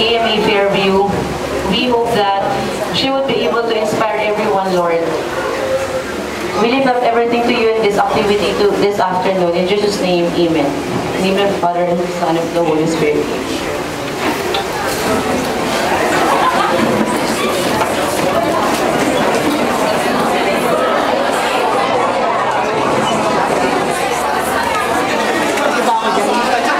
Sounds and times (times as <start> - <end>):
Speech: 0.0 - 13.7, 17.3 - 26.7.